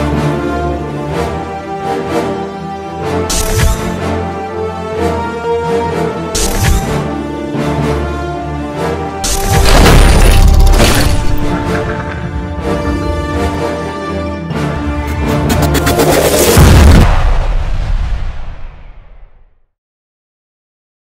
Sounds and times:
Music: 0.0 - 19.5.

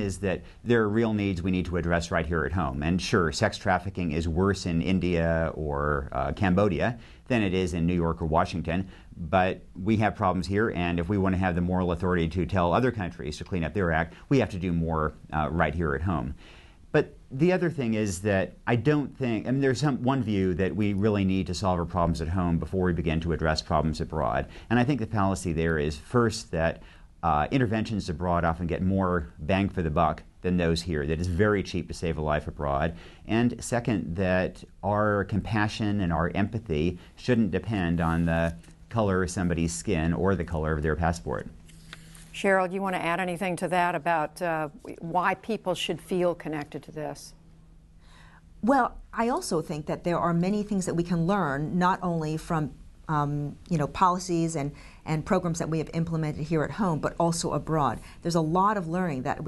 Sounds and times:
Female speech, woman speaking: 42.4 - 47.4, 48.6 - 59.4.

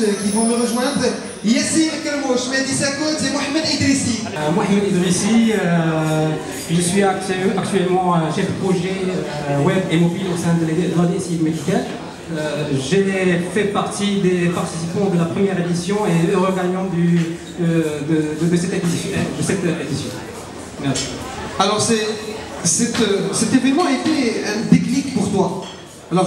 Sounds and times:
Speech: 0.0 - 26.2.

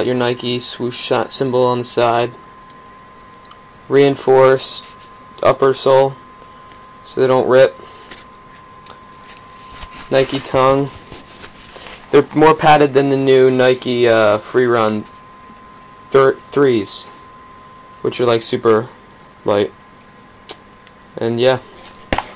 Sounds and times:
Speech: 0.0 - 2.4, 3.9 - 6.2, 7.1 - 7.8, 10.1 - 11.0, 12.1 - 15.1, 16.1 - 17.2, 18.0 - 19.8, 21.2 - 21.7.

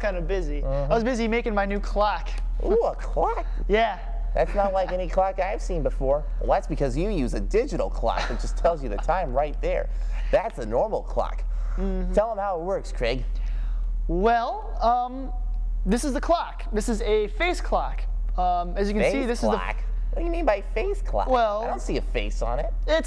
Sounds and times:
Speech: 15.9 - 20.4, 21.2 - 23.0.

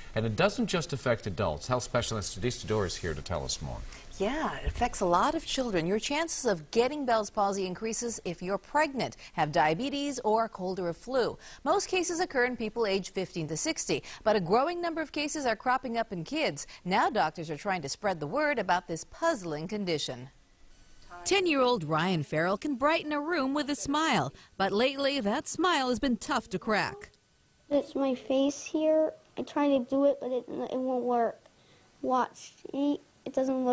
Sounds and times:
Speech: 0.2 - 7.2.

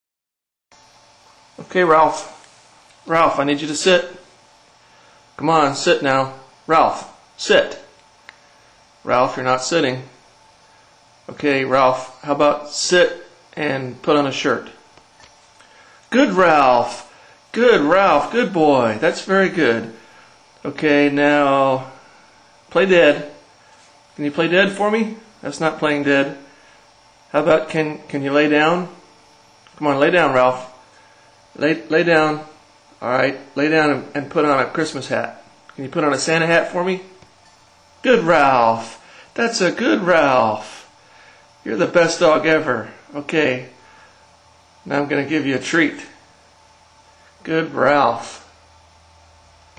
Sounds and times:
Speech: 1.6 - 2.4, 3.0 - 4.3, 5.4 - 8.0, 9.0 - 10.2, 11.3 - 14.8, 16.1 - 20.0, 20.6 - 22.0, 22.7 - 23.4, 24.2 - 26.5, 27.3 - 29.0, 29.7 - 30.8, 31.6 - 37.2, 38.0 - 40.9, 41.6 - 43.8, 44.8 - 46.2, 47.4 - 48.6.

